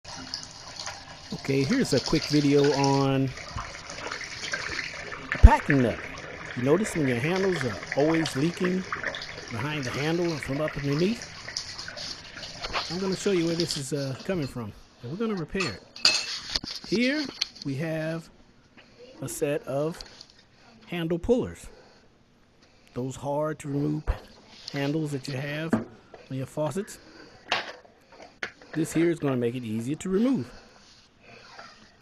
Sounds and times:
Water tap, faucet: 0.0 - 14.4
Liquid: 0.0 - 14.5
Bathtub (filling or washing): 0.0 - 18.2, 18.9 - 20.4, 23.0 - 27.6, 28.2 - 32.0
Speech: 1.3 - 3.4, 5.4 - 6.0, 6.6 - 8.9, 9.5 - 11.2, 12.9 - 15.8, 16.9 - 18.3, 19.2 - 20.0, 20.9 - 21.8, 23.0 - 27.0, 28.8 - 30.6.

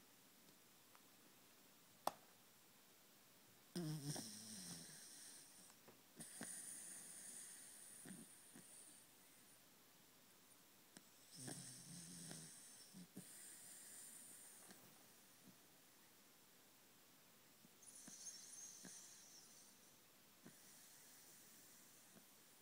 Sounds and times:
Snoring: 3.8 - 5.6, 6.2 - 9.0, 11.3 - 14.7, 17.8 - 19.8.

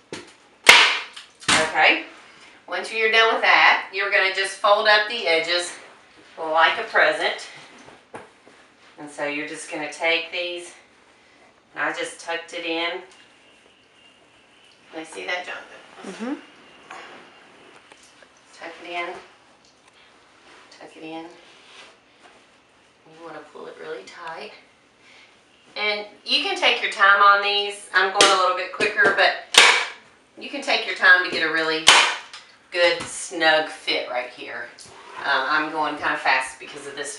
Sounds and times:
Inside, small room: 0.0 - 37.1
Speech: 23.1 - 24.6, 32.8 - 37.1.

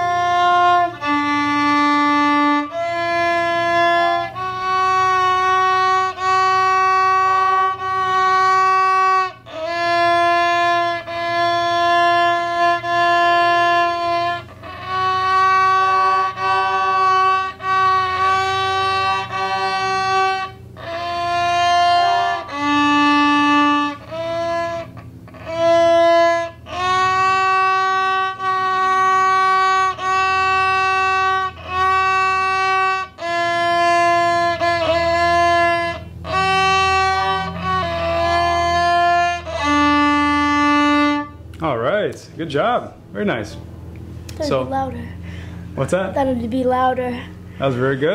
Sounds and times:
Violin, fiddle: 0.0 - 41.6.

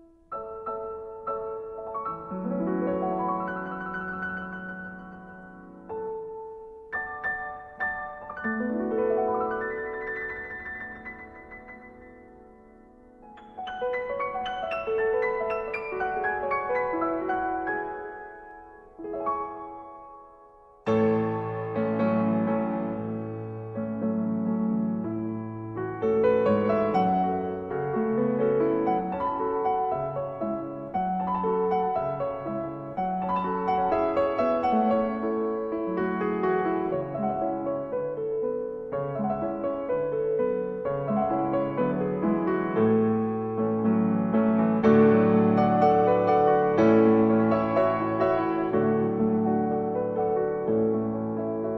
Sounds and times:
Music: 0.0 - 51.7.

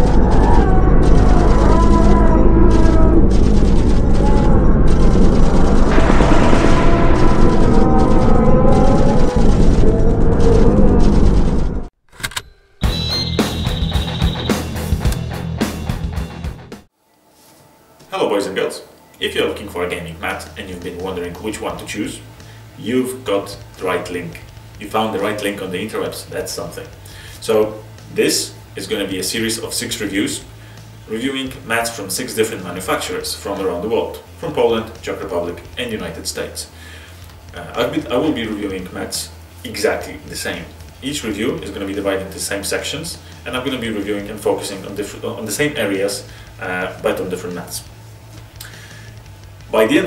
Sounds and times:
Boom: 0.0 - 11.9
Music: 12.5 - 50.0.

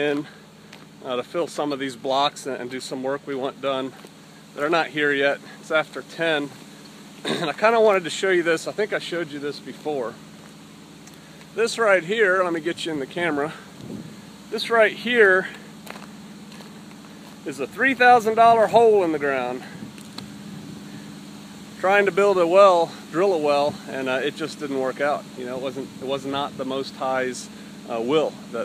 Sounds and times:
Speech: 0.0 - 0.4, 1.0 - 4.0, 4.6 - 6.6, 7.3 - 10.2, 11.6 - 13.6, 14.5 - 15.6, 17.4 - 19.7, 21.8 - 28.6.

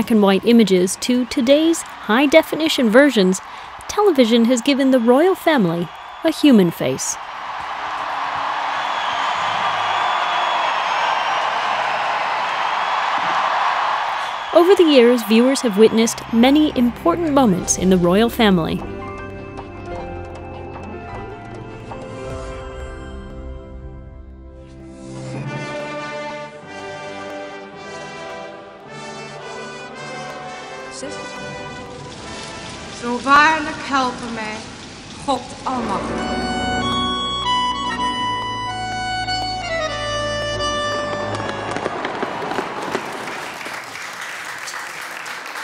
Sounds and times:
Music: 14.6 - 34.4, 35.4 - 42.0.

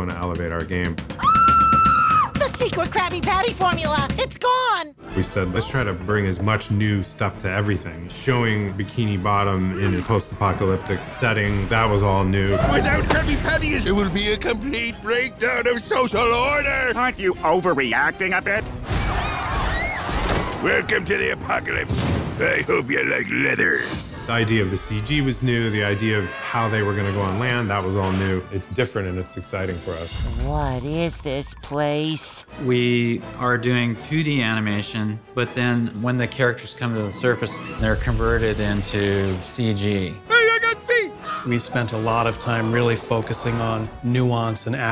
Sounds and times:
Music: 0.0 - 44.9.

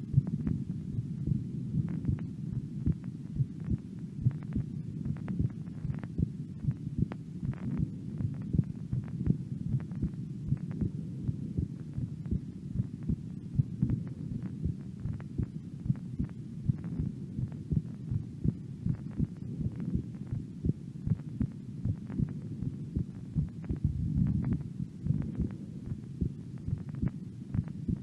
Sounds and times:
Heart sounds, heartbeat: 0.1 - 0.6, 1.3 - 28.0.

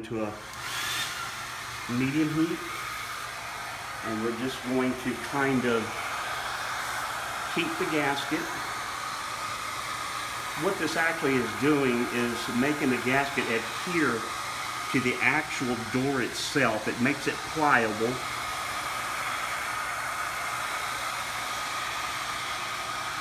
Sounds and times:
Speech: 0.0 - 0.5, 1.9 - 2.7, 4.0 - 6.0, 7.5 - 8.6, 10.6 - 14.3, 14.9 - 18.3.

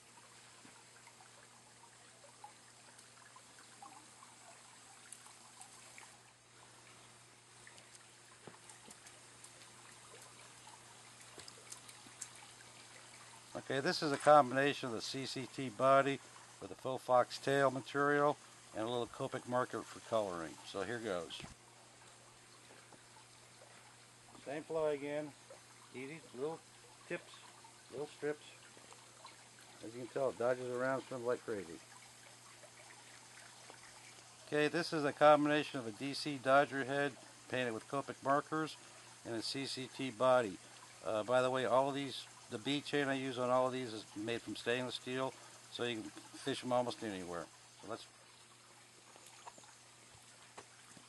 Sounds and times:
Speech: 13.6 - 21.6, 24.4 - 25.4, 26.0 - 28.6, 29.8 - 31.8, 34.5 - 48.1.

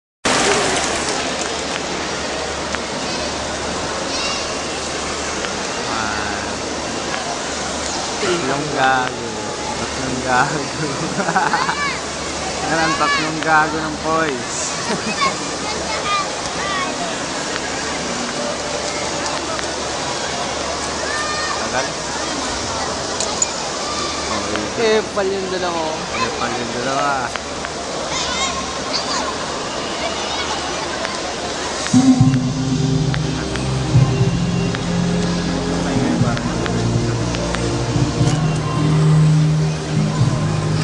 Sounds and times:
Hubbub, speech noise, speech babble: 0.2 - 40.8.

